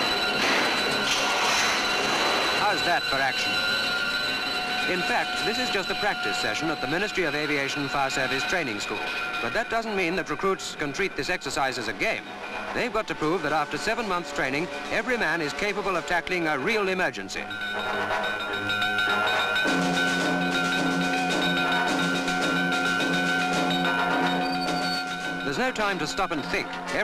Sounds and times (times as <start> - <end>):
Fire engine, fire truck (siren): 0.0 - 9.4
Speech: 4.9 - 12.2, 12.8 - 17.5, 25.5 - 27.0.